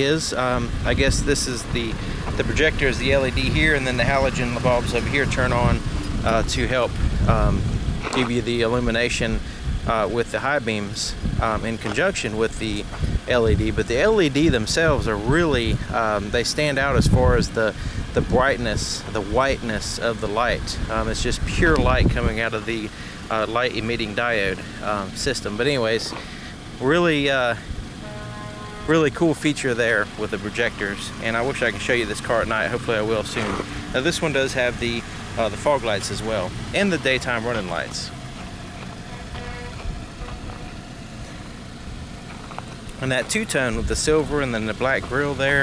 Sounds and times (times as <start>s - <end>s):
Speech: 0.0s - 26.2s, 26.8s - 27.7s, 28.9s - 38.1s, 43.0s - 45.6s
Car: 0.0s - 45.6s
Outside, rural or natural: 0.0s - 45.6s.